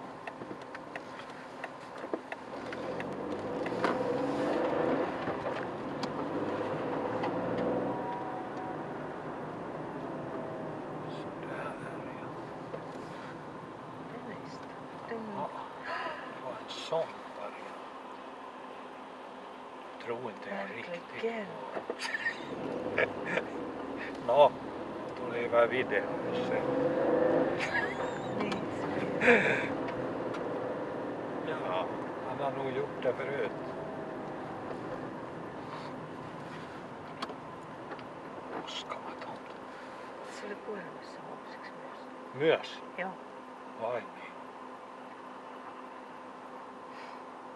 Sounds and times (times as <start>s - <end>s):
Car: 0.0s - 47.5s.